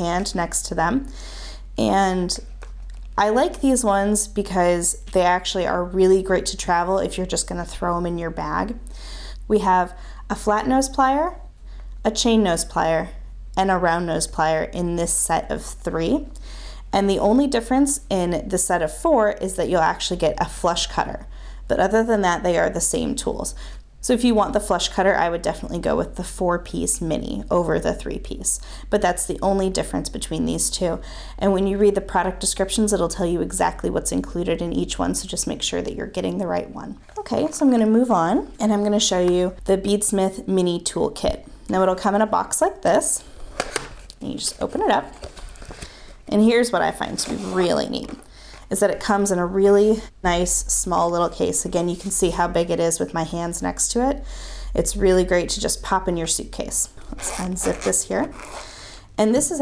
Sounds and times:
Speech: 0.0 - 1.1, 1.8 - 2.5, 3.2 - 8.9, 9.5 - 11.4, 12.1 - 43.2, 44.2 - 45.2, 46.3 - 54.2, 54.8 - 58.4, 59.2 - 59.6.

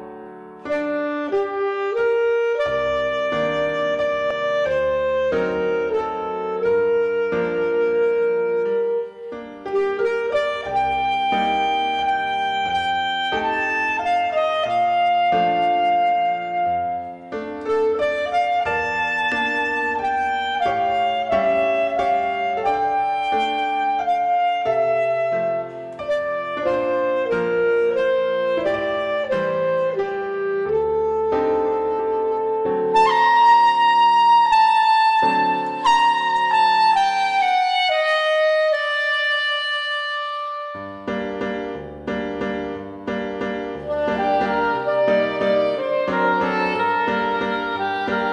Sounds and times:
Clarinet: 0.0 - 48.3.

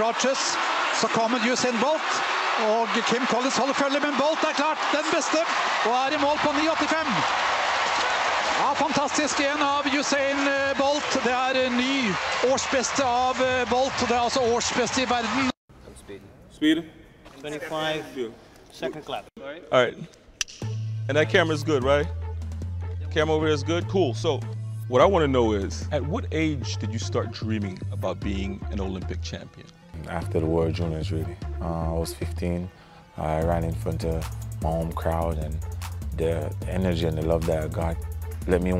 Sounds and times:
Speech: 0.0 - 2.0, 2.6 - 7.2, 8.6 - 20.1, 21.1 - 22.1, 23.1 - 35.6, 36.2 - 38.8
Music: 0.0 - 15.6, 20.4 - 38.8.

